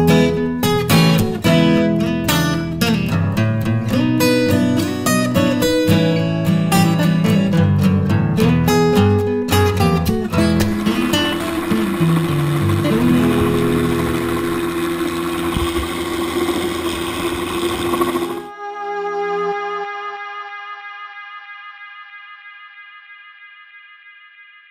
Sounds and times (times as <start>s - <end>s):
Music: 0.0s - 15.9s, 18.1s - 24.7s.